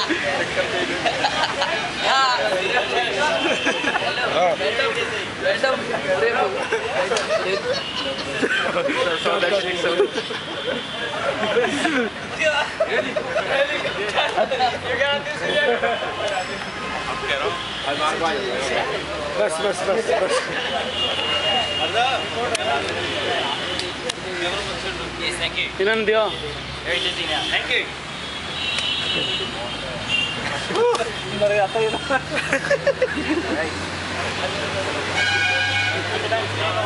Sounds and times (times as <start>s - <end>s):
Hubbub, speech noise, speech babble: 0.0s - 36.8s
Outside, urban or manmade: 0.0s - 36.8s.